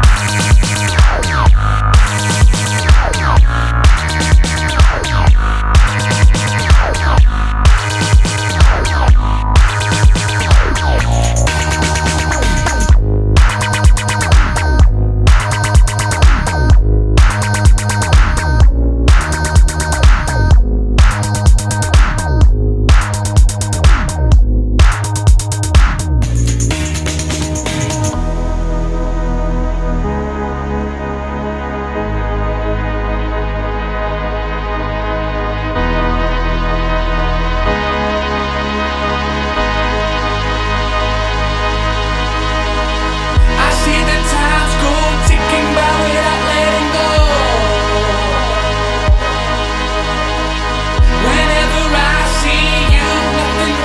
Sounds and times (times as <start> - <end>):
Sampler: 0.0 - 28.3.